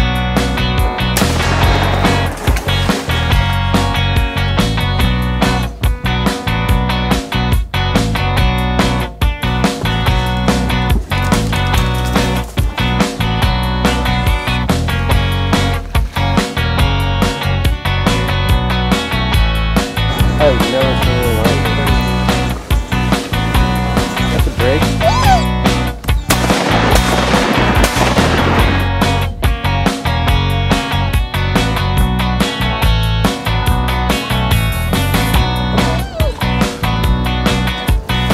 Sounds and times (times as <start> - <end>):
Music: 0.0 - 38.3
Speech: 20.2 - 22.2, 24.2 - 25.5.